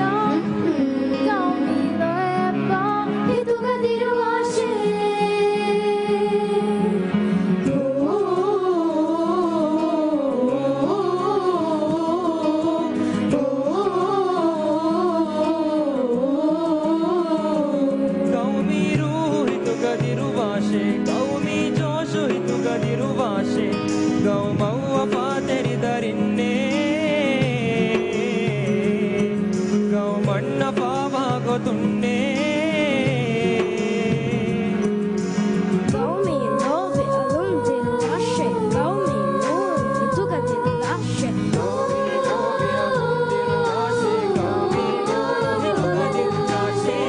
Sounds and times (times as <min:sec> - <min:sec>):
Music: 0:00.0 - 0:47.0
Male singing: 0:17.6 - 0:35.0, 0:44.8 - 0:47.0.